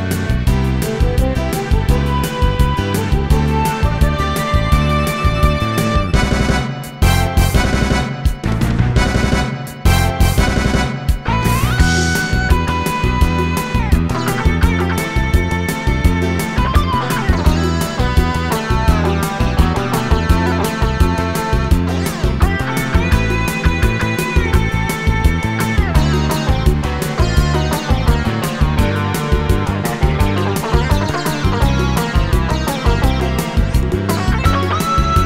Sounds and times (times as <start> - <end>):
Music: 0.0 - 35.2.